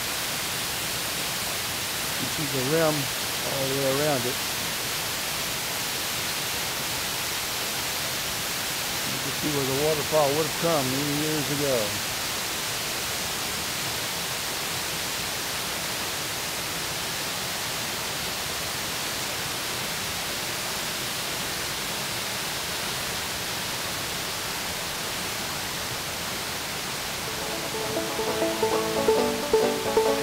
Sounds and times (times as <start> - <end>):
Waterfall: 0.0 - 30.2.